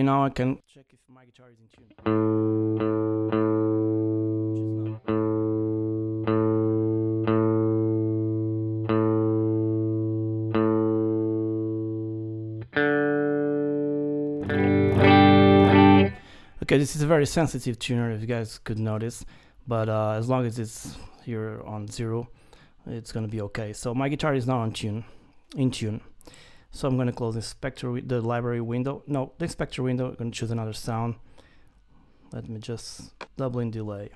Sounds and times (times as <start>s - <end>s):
Distortion: 0.0s - 34.1s
Effects unit: 1.8s - 16.5s
Guitar: 1.8s - 17.6s.